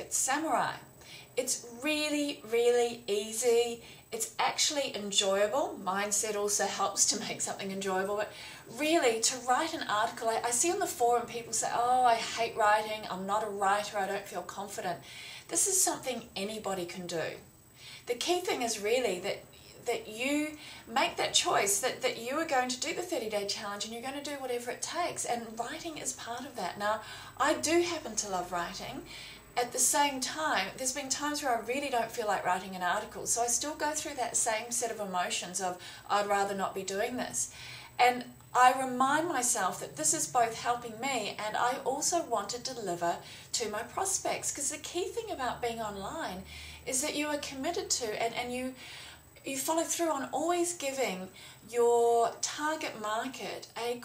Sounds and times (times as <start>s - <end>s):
Speech: 0.0s - 17.4s, 18.1s - 48.8s, 49.4s - 54.0s.